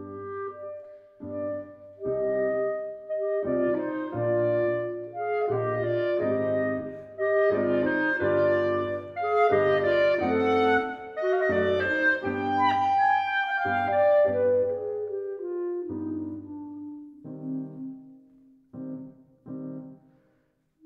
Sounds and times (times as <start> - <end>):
Wind instrument, woodwind instrument: 0.0 - 19.1.